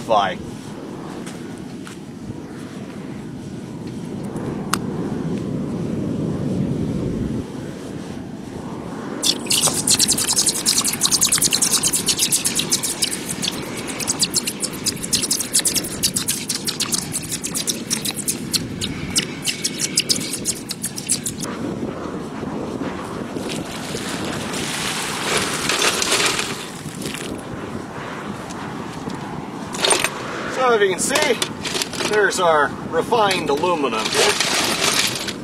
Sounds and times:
Outside, rural or natural: 0.0 - 35.4.

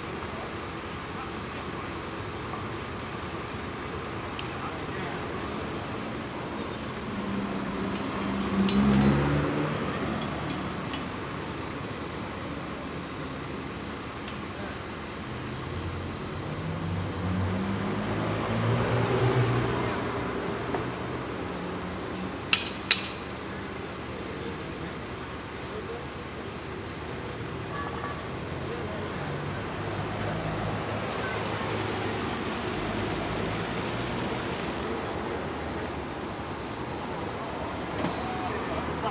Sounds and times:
Speech: 0.0 - 6.0, 14.4 - 15.0, 23.4 - 32.2, 38.0 - 39.1
Car: 0.0 - 39.1
Medium engine (mid frequency): 0.0 - 39.1
Truck: 0.0 - 39.1.

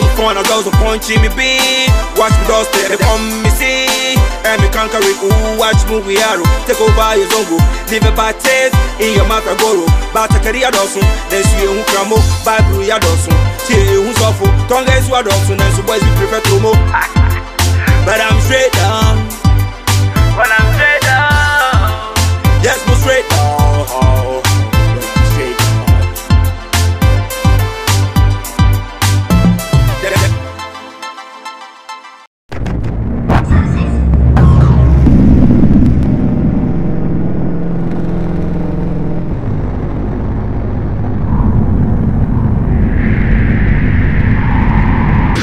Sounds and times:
Music: 0.0 - 35.0.

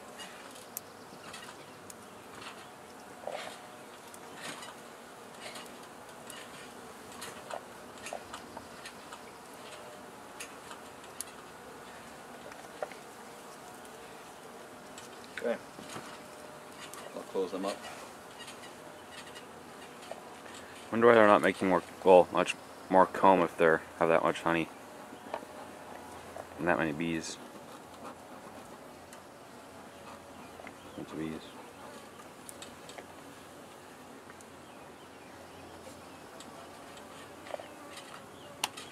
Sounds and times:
Bee, wasp, etc.: 0.0 - 38.9
Speech: 17.1 - 17.8, 20.9 - 24.7, 26.6 - 27.4, 31.0 - 31.6.

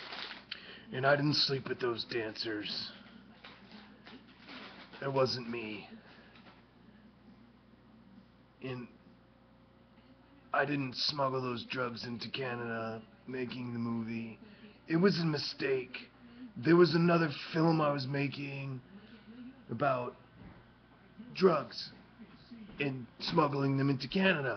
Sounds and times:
Speech: 0.9 - 3.9, 5.0 - 6.2, 8.6 - 9.0, 10.2 - 20.2, 21.1 - 24.5.

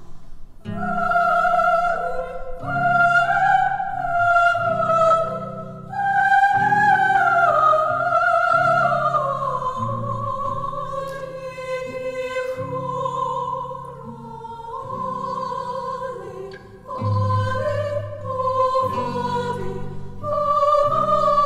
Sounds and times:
Choir: 0.0 - 21.4
Opera: 0.0 - 21.4.

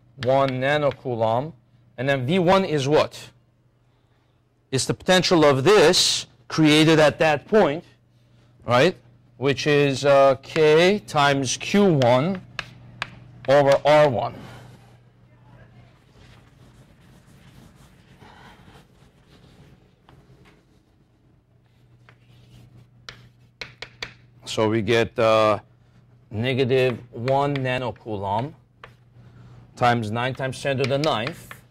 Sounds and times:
Speech: 4.7 - 7.9, 24.5 - 25.6, 26.3 - 28.6, 29.8 - 31.5
Writing: 16.0 - 20.2.

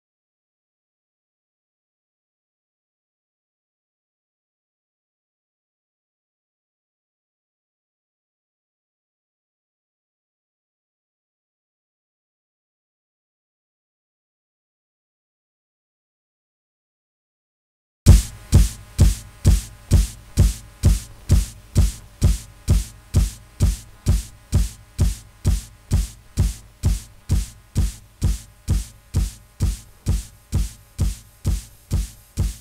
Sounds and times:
Music: 18.1 - 32.6.

